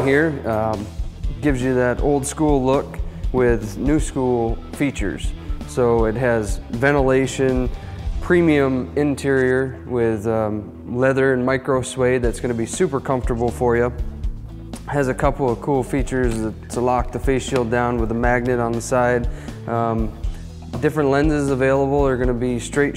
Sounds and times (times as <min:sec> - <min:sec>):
Speech: 0:00.0 - 0:14.0, 0:14.9 - 0:20.2, 0:20.8 - 0:22.9
Music: 0:00.0 - 0:22.9.